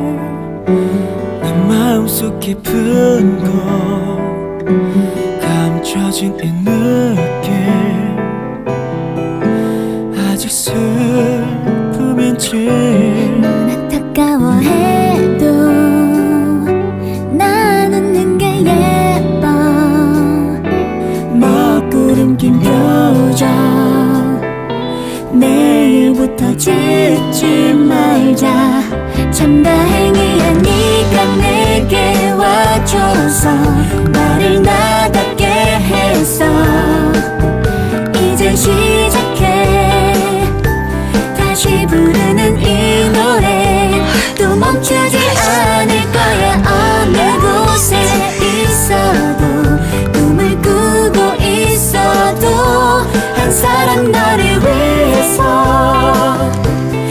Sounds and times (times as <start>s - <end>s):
Acoustic guitar: 0.0s - 57.1s.